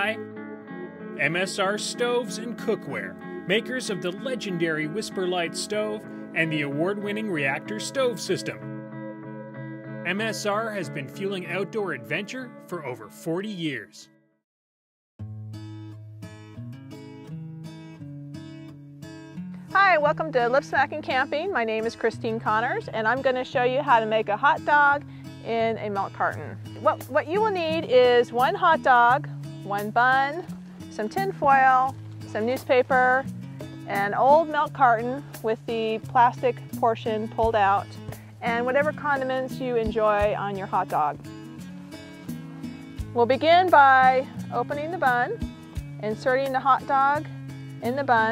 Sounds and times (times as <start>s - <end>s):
Music: 0.0s - 14.4s, 15.2s - 48.3s
Speech: 10.1s - 14.1s, 19.8s - 24.9s, 33.9s - 37.8s, 38.4s - 41.2s, 47.8s - 48.3s.